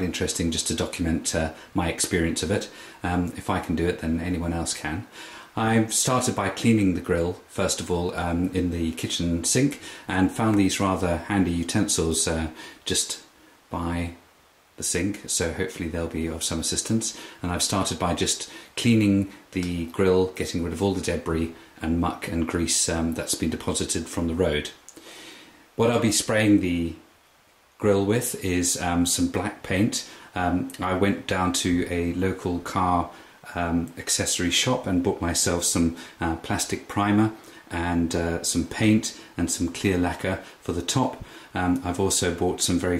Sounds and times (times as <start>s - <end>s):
Speech: 0.0s - 14.2s, 14.8s - 24.8s, 25.8s - 27.1s, 27.8s - 42.9s.